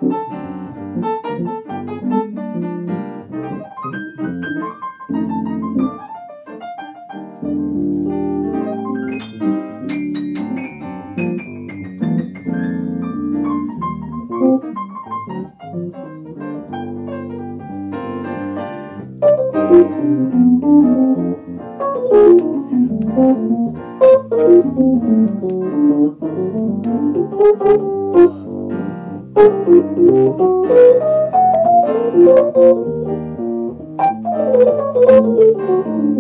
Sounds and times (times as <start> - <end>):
Electronic organ: 0.0 - 36.2
Hammond organ: 7.4 - 36.2.